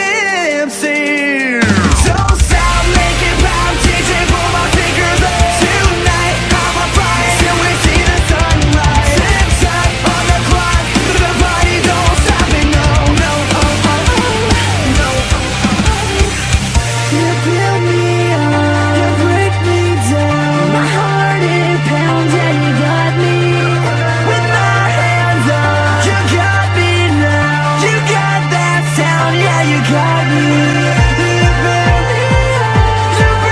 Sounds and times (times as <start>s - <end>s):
Music: 0.0s - 33.5s.